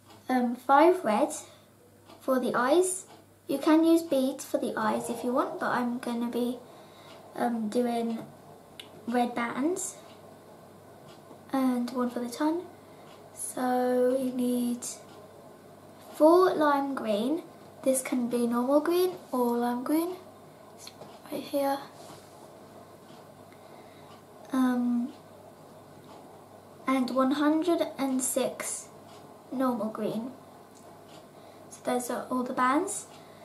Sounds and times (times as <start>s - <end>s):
Speech: 0.3s - 1.5s, 2.2s - 6.6s, 7.4s - 8.3s, 9.1s - 10.0s, 11.5s - 12.7s, 13.4s - 15.1s, 16.1s - 20.2s, 20.8s - 21.9s, 24.5s - 25.1s, 26.9s - 28.9s, 29.5s - 30.4s, 31.7s - 33.1s.